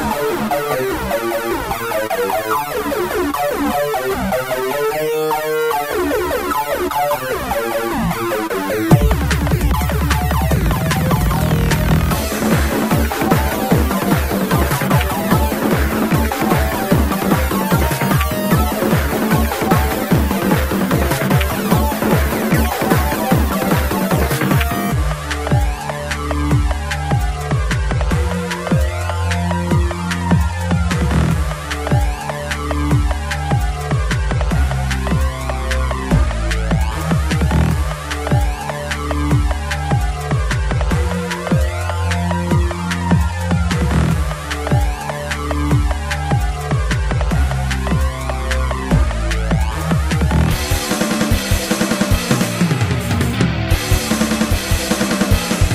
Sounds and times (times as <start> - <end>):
Techno: 0.0 - 55.7
Video game music: 0.0 - 55.7.